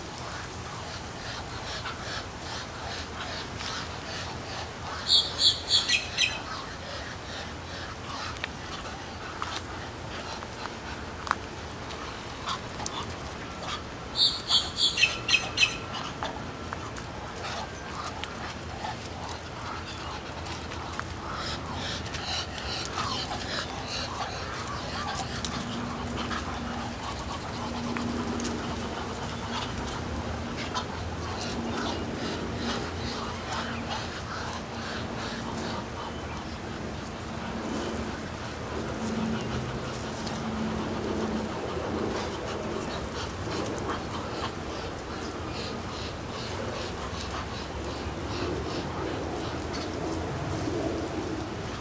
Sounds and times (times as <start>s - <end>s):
Duck: 0.2s - 38.2s, 38.9s - 50.6s.